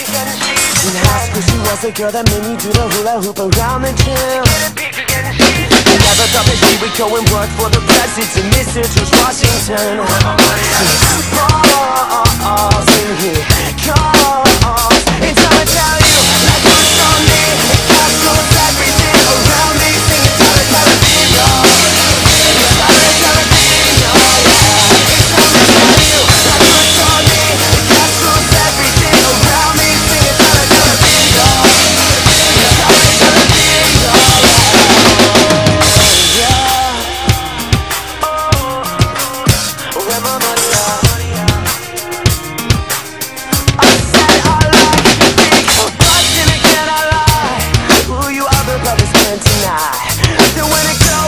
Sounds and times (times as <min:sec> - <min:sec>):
Music: 0:00.0 - 0:51.2.